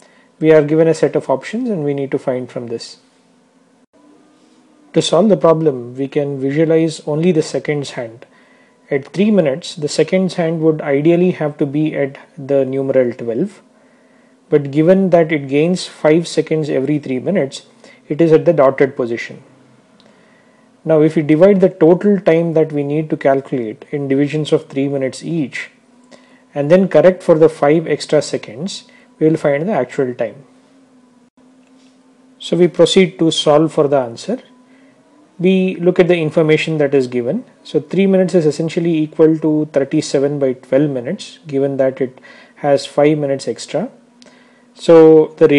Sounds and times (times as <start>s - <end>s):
Speech: 0.4s - 3.0s, 4.9s - 8.3s, 8.9s - 13.7s, 14.5s - 19.5s, 20.8s - 25.8s, 26.5s - 30.5s, 32.4s - 34.5s, 35.4s - 44.0s, 44.8s - 45.5s.